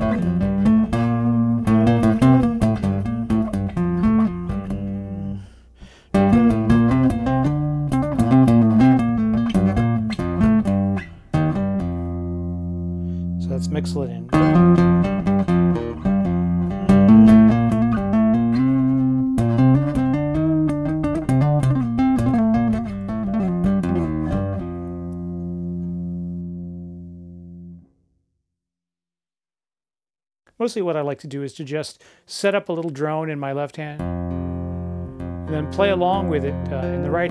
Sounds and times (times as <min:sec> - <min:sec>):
Tapping (guitar technique): 0:00.0 - 0:27.8, 0:34.0 - 0:37.3
Bass guitar: 0:00.0 - 0:28.0, 0:33.9 - 0:37.3.